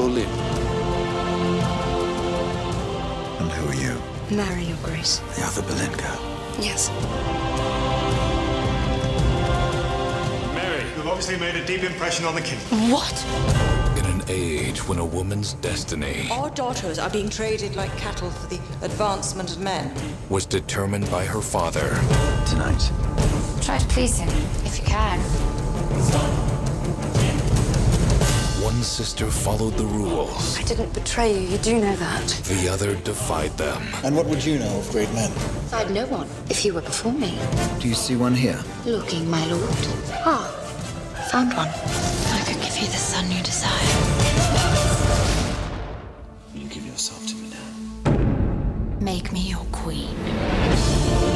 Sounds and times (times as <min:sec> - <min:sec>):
Music: 0:00.0 - 0:51.3.